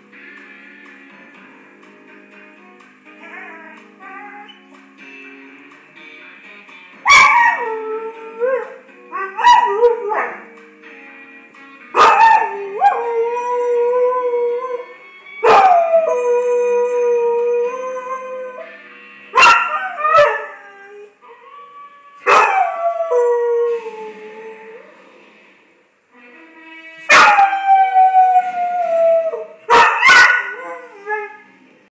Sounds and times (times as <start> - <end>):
Yip: 7.1 - 7.6, 12.0 - 12.4, 19.4 - 20.3, 29.7 - 30.5.